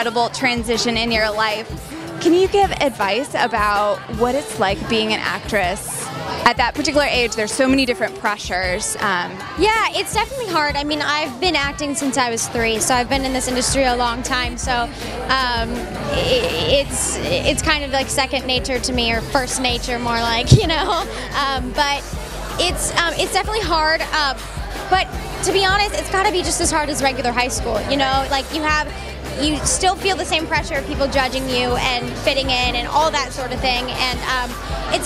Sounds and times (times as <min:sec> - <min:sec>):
Speech: 0:00.0 - 0:22.0, 0:22.6 - 0:35.0
Music: 0:00.0 - 0:35.0.